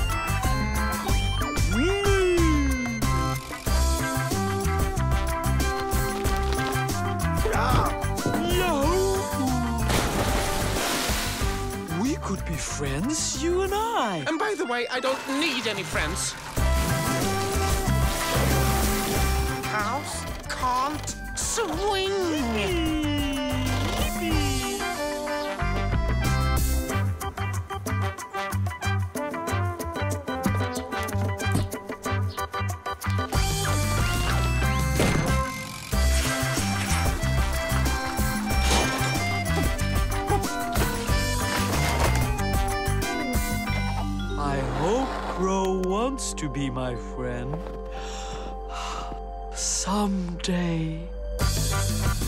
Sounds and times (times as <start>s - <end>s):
Music: 0.0s - 52.2s.